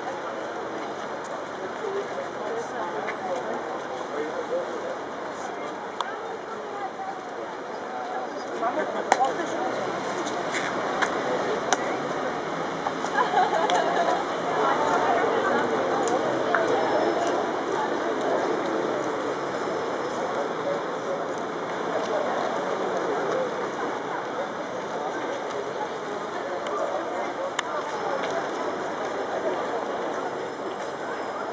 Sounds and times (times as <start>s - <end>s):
Speech: 0.0s - 31.5s.